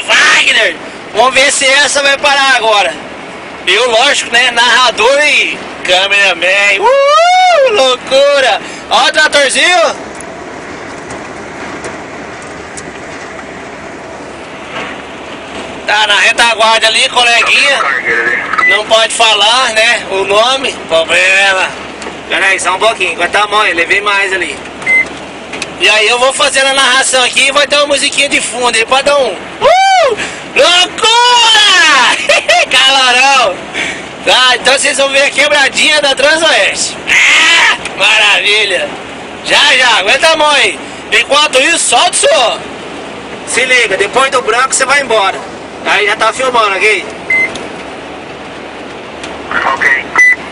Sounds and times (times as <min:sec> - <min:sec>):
Speech: 0:00.0 - 0:03.0, 0:03.6 - 0:10.0, 0:15.9 - 0:24.6, 0:25.8 - 0:29.4, 0:30.6 - 0:33.6, 0:34.2 - 0:37.1, 0:37.7 - 0:42.7, 0:43.5 - 0:47.1.